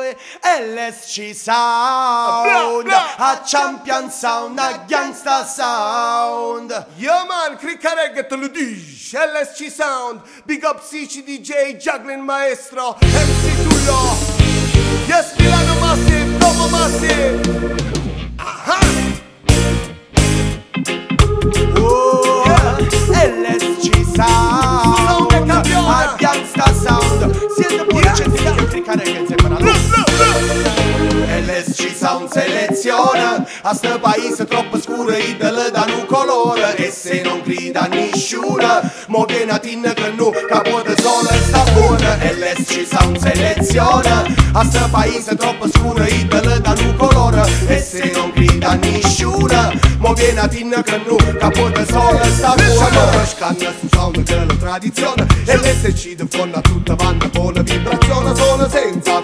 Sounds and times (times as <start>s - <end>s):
Music: 13.0s - 59.2s.